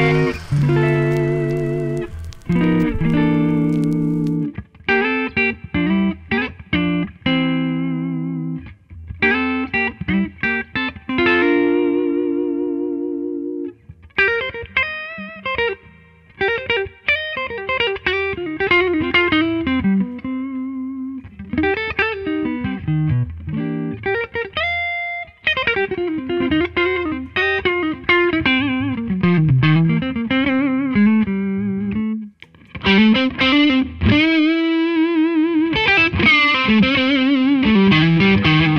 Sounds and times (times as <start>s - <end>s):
Electric guitar: 0.0s - 38.7s.